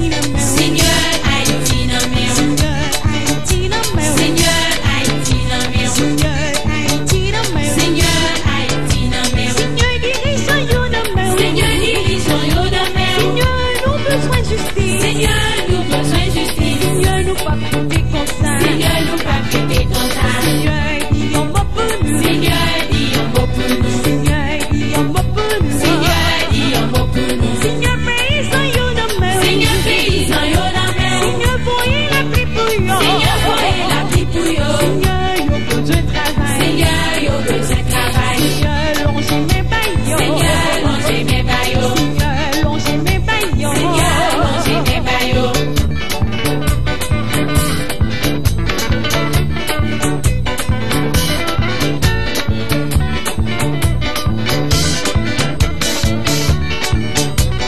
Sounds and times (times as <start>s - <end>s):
Music: 0.0s - 57.6s.